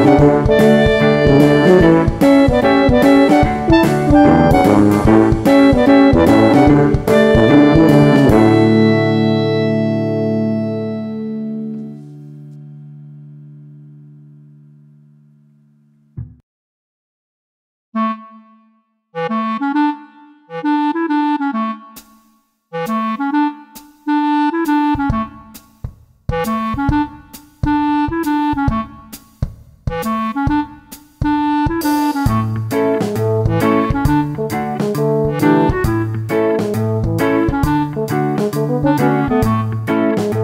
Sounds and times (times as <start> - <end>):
Music: 0.0 - 16.4, 18.0 - 40.4.